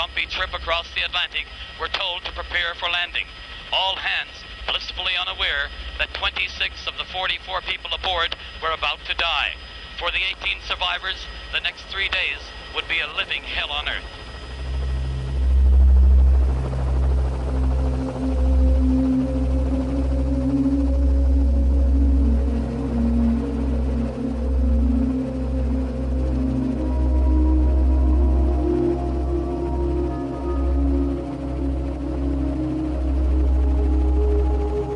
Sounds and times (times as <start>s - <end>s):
Outside, rural or natural: 0.0s - 34.9s
Music: 14.1s - 34.9s.